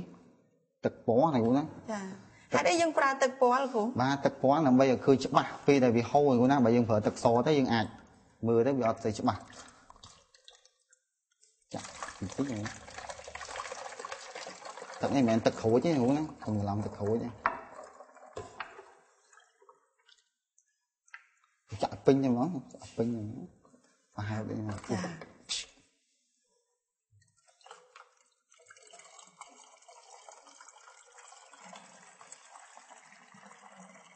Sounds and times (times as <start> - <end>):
Liquid: 9.0 - 21.6, 27.2 - 34.1.